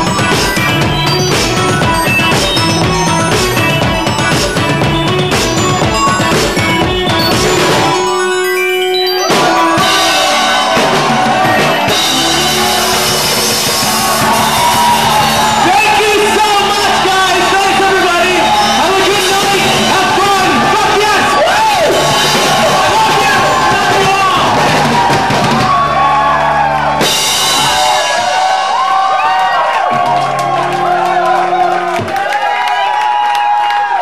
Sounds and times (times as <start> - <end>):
Music: 0.0 - 34.0.